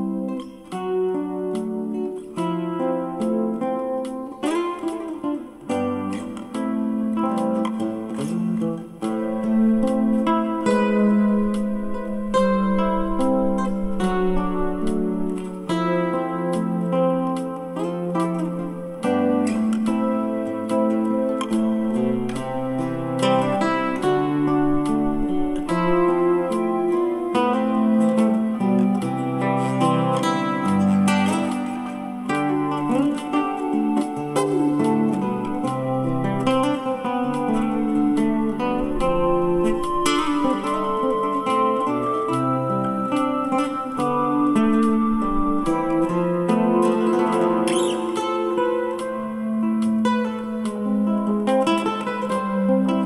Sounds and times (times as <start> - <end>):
Acoustic guitar: 0.0 - 53.0.